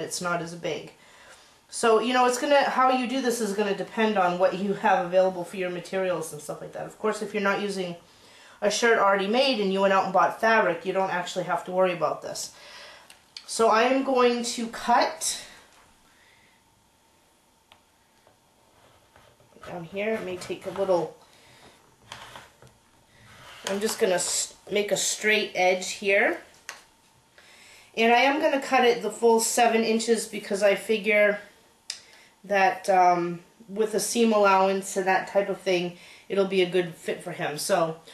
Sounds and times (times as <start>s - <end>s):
Speech: 0.0s - 1.0s, 1.7s - 8.0s, 8.6s - 12.6s, 13.4s - 15.6s, 19.6s - 21.2s, 23.7s - 26.5s, 28.0s - 31.5s, 32.5s - 38.0s
Inside, small room: 0.0s - 38.1s.